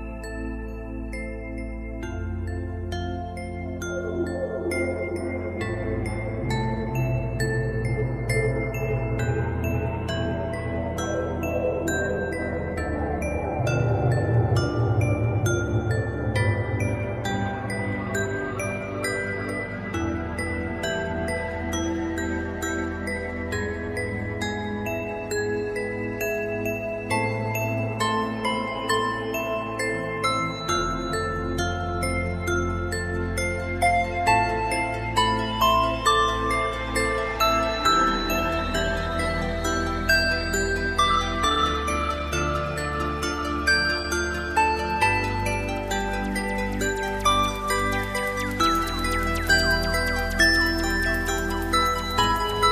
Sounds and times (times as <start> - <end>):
Music: 0.0 - 52.7.